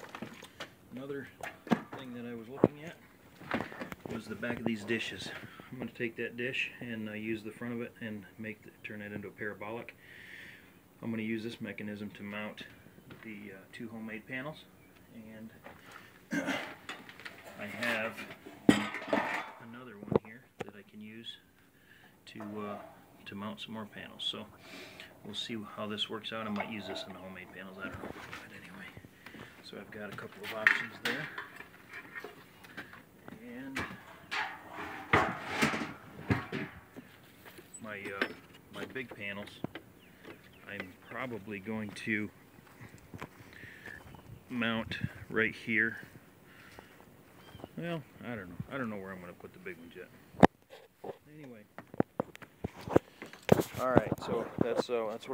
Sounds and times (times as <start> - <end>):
Speech: 0.9 - 3.0, 4.1 - 10.0, 11.0 - 15.6, 17.4 - 21.5, 22.2 - 24.5, 25.2 - 29.0, 29.6 - 31.4, 33.3 - 34.0, 37.8 - 39.7, 40.6 - 42.3, 44.5 - 46.1, 47.8 - 50.1, 51.1 - 51.7, 53.7 - 55.3.